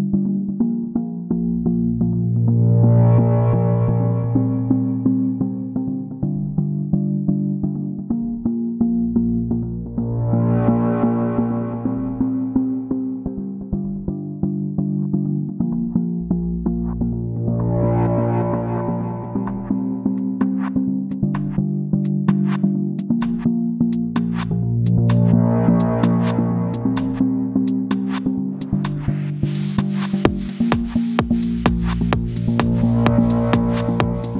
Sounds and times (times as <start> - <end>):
Techno: 0.3 - 34.3.